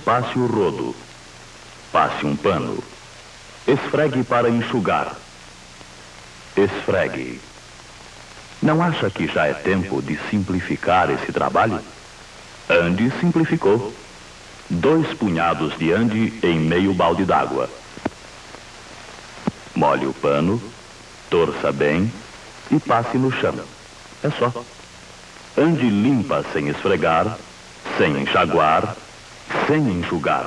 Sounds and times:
Speech: 0.0s - 1.1s, 2.0s - 3.0s, 3.7s - 5.3s, 6.6s - 7.5s, 8.6s - 12.0s, 12.7s - 14.1s, 14.7s - 17.8s, 19.8s - 24.7s, 25.6s - 30.4s.

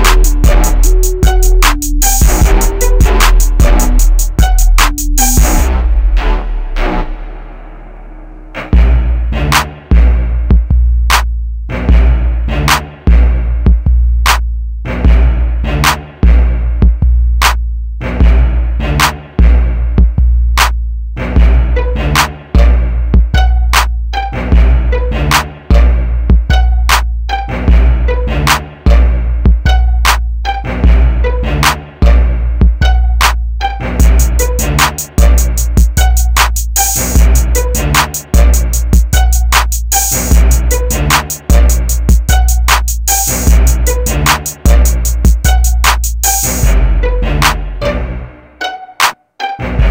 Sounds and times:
Music: 0.0s - 49.9s.

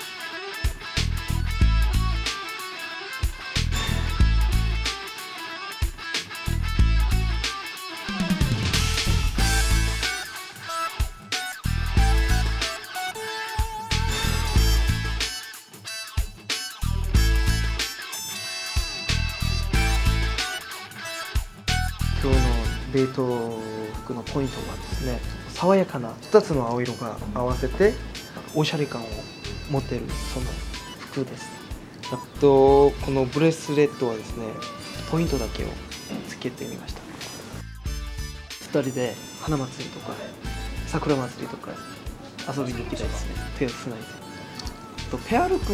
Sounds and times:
Music: 0.0s - 45.7s
Speech: 22.2s - 31.5s, 32.1s - 37.2s, 38.6s - 44.1s, 45.1s - 45.7s.

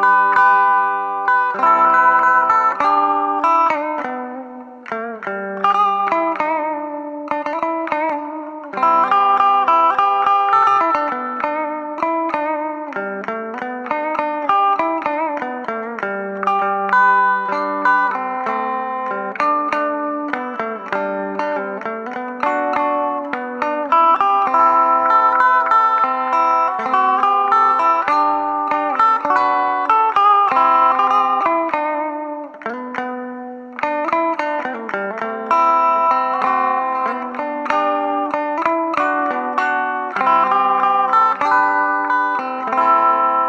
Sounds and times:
Electric guitar: 0.0s - 43.4s
Strum: 0.0s - 43.4s.

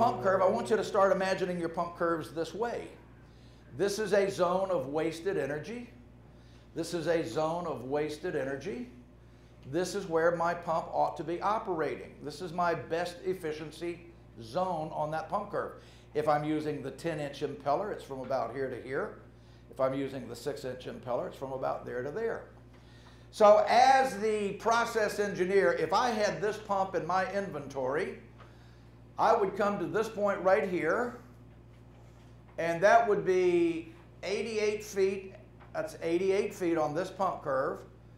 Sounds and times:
Speech: 0.0s - 3.1s, 3.8s - 6.0s, 6.8s - 9.0s, 9.7s - 22.6s, 23.3s - 28.3s, 29.2s - 31.4s, 32.6s - 37.9s.

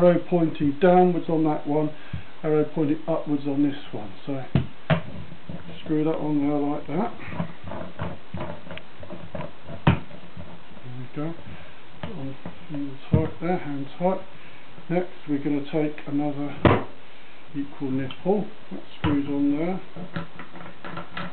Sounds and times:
Speech: 0.0s - 4.6s, 5.8s - 7.2s, 10.8s - 11.4s, 12.1s - 14.3s, 14.9s - 16.8s, 17.6s - 19.9s
Inside, small room: 0.0s - 21.3s.

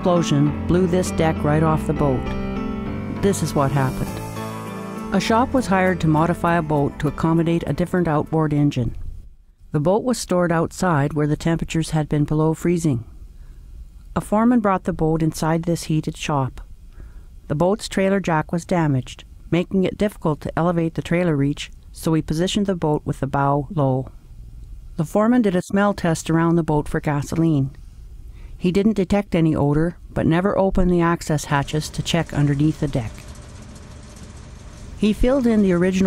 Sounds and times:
Speech: 0.0s - 2.3s, 3.2s - 4.2s, 5.2s - 9.0s, 9.7s - 13.1s, 14.2s - 16.7s, 17.5s - 24.2s, 25.0s - 27.8s, 28.6s - 33.2s, 35.0s - 36.0s.

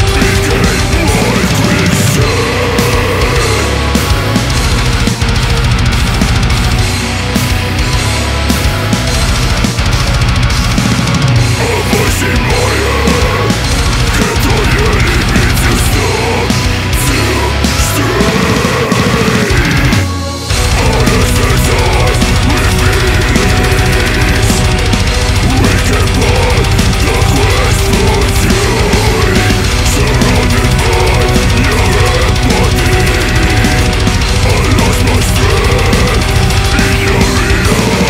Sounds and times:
Music: 0.0s - 38.1s.

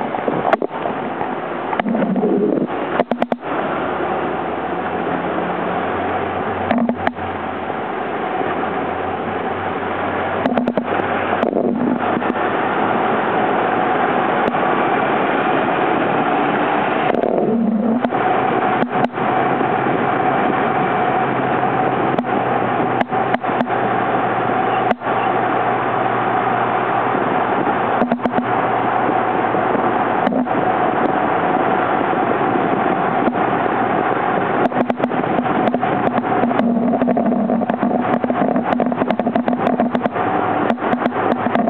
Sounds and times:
Car passing by: 0.8s - 36.6s.

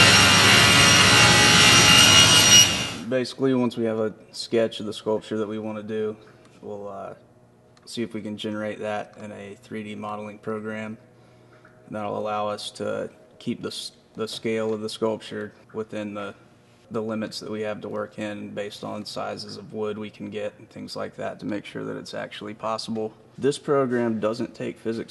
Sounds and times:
Speech: 3.1s - 7.2s, 7.9s - 11.0s, 11.9s - 25.1s.

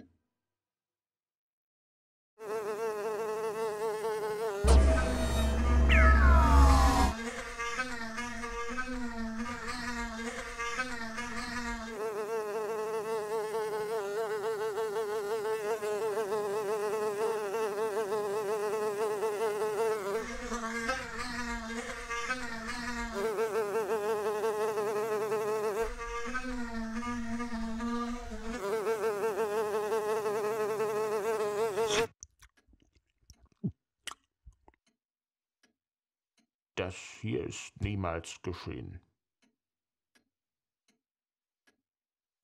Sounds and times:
Fly, housefly: 2.4s - 32.1s
Mosquito: 2.4s - 32.1s.

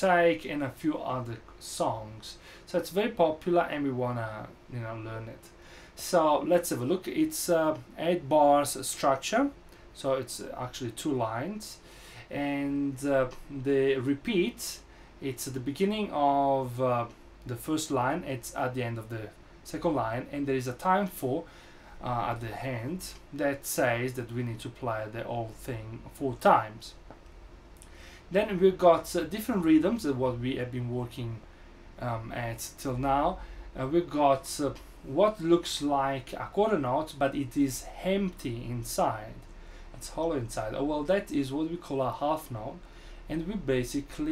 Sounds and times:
Speech: 0.0s - 27.0s, 28.3s - 31.4s, 32.0s - 44.3s.

